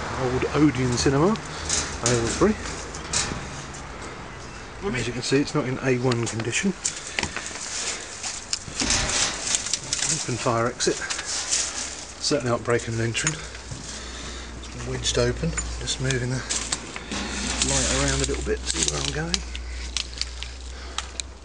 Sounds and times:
Speech: 0.2 - 1.4, 2.0 - 2.7, 4.8 - 6.8, 10.0 - 11.2, 12.2 - 13.5, 14.7 - 16.6, 17.6 - 19.5.

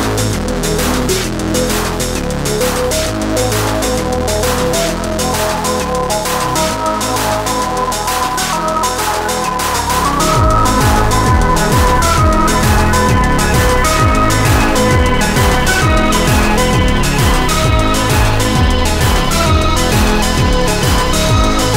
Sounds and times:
Video game music: 2.8 - 21.7.

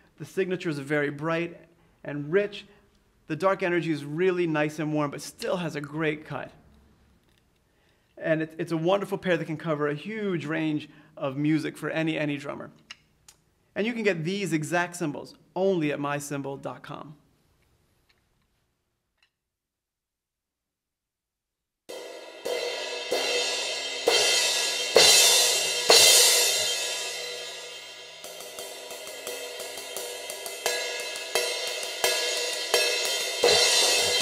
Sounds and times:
Speech: 0.2 - 2.7, 3.3 - 6.6, 8.2 - 12.8, 13.8 - 17.2.

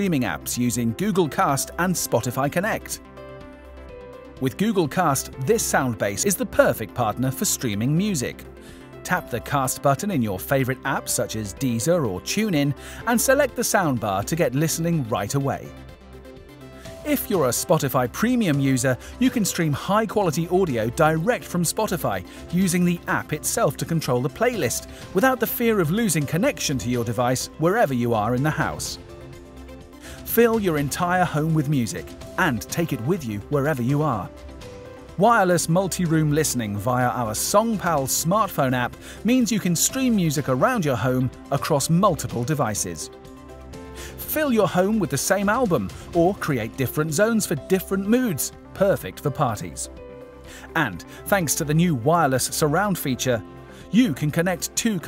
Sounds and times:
Speech: 0.0 - 3.0, 4.4 - 8.4, 9.0 - 15.7, 17.0 - 29.0, 30.2 - 34.3, 35.2 - 43.1, 44.2 - 49.9, 50.7 - 55.0
Music: 0.0 - 55.0.

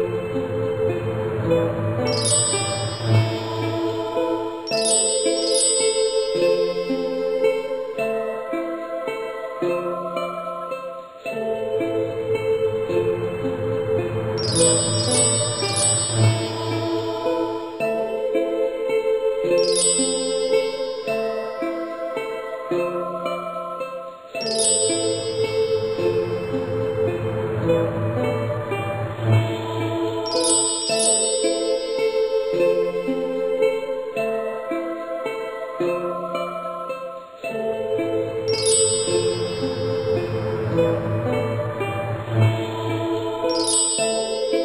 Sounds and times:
Music: 0.0 - 44.6.

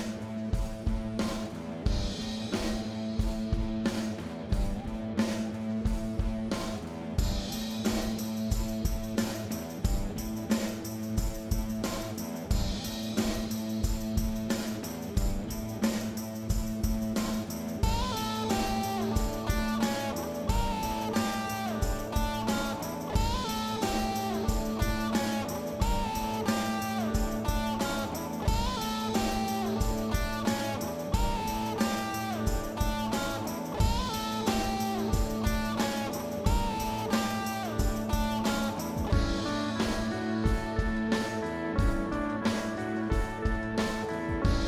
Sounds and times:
Music: 0.0 - 44.6.

